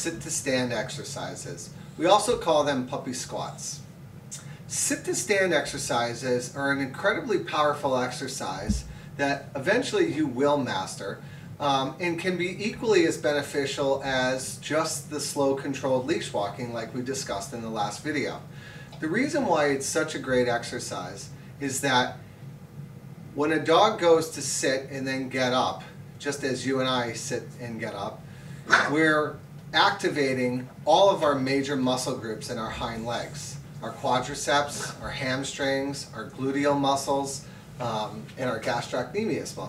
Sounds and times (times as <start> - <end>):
Speech: 0.0 - 22.2, 23.3 - 39.6.